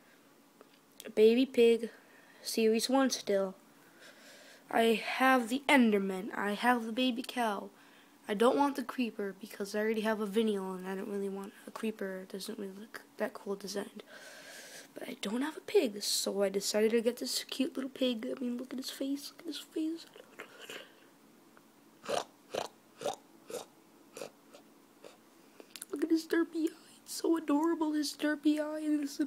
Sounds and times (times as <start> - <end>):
Inside, small room: 0.0 - 29.2
Speech: 1.0 - 3.6, 4.7 - 7.7, 8.3 - 14.1, 15.0 - 20.2, 25.8 - 29.2.